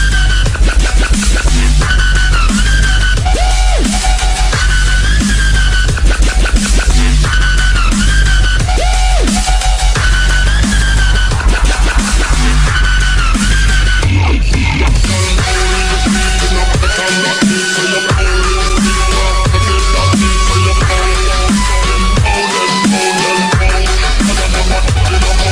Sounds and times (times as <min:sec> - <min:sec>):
Dubstep: 0:00.0 - 0:25.5.